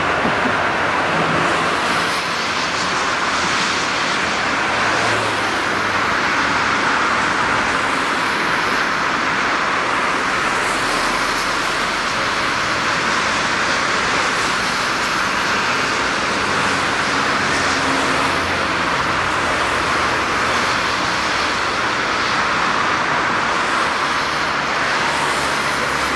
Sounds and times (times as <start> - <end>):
Train: 0.0 - 26.1.